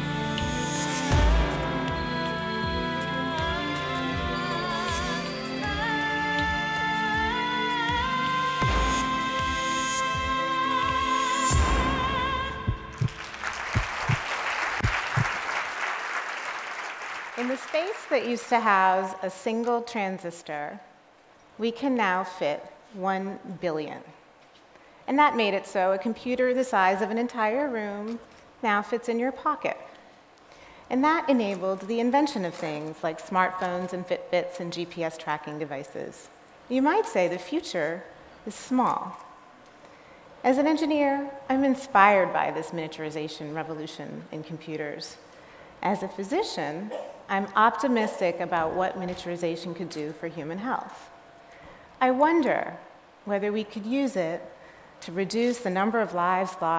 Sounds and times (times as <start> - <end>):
Speech: 17.4 - 20.9, 21.6 - 24.2, 25.1 - 29.9, 30.9 - 39.2, 40.5 - 45.2, 45.8 - 51.1, 52.0 - 56.7.